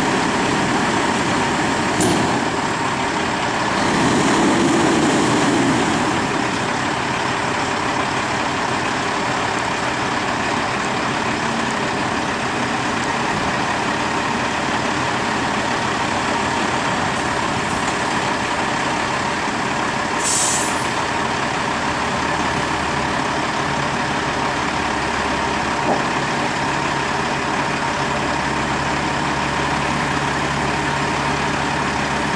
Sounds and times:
Vehicle: 0:00.0 - 0:32.3.

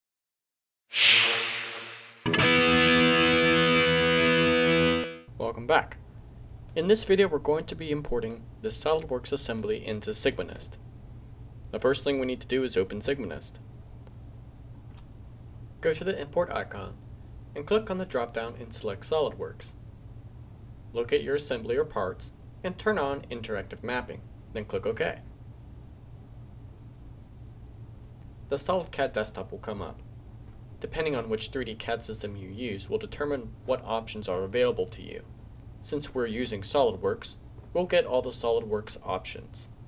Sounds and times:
Music: 0:01.0 - 0:05.3
Speech: 0:05.4 - 0:06.0, 0:06.7 - 0:10.8, 0:11.7 - 0:13.6, 0:15.8 - 0:19.8, 0:20.9 - 0:25.3, 0:28.5 - 0:30.0, 0:30.8 - 0:39.8.

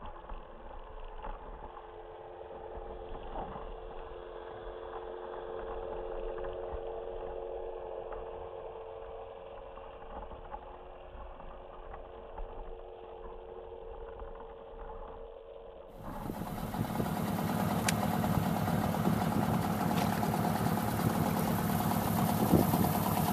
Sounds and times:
Outside, rural or natural: 0:00.0 - 0:23.3.

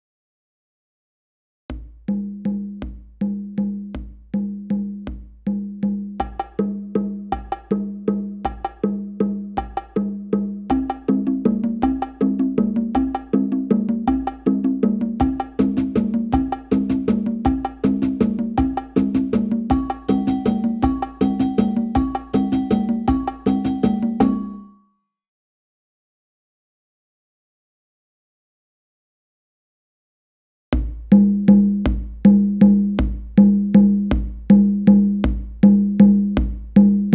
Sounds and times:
Music: 0:01.7 - 0:25.2, 0:30.8 - 0:37.1.

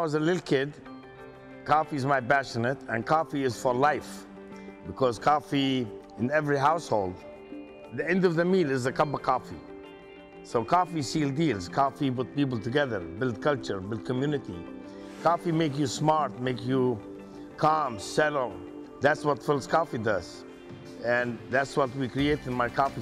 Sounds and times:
Speech: 0:00.0 - 0:00.8, 0:01.7 - 0:04.2, 0:04.9 - 0:07.2, 0:08.0 - 0:09.6, 0:10.5 - 0:14.6, 0:15.2 - 0:17.0, 0:17.6 - 0:20.4, 0:21.0 - 0:23.0
Music: 0:00.0 - 0:23.0.

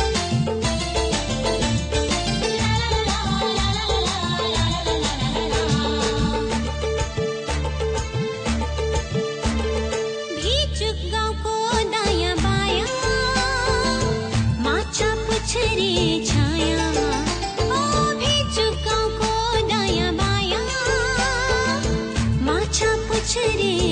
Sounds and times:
Music of Bollywood: 0:00.0 - 0:23.9.

